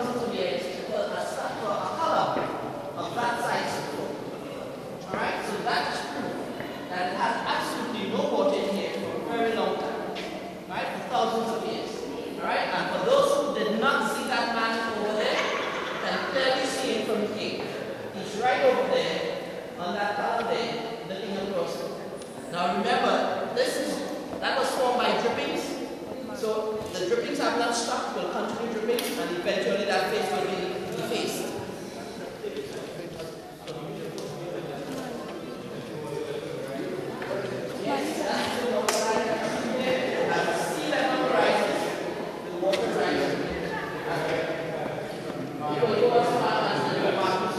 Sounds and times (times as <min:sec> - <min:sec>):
Speech: 0:00.0 - 0:47.5.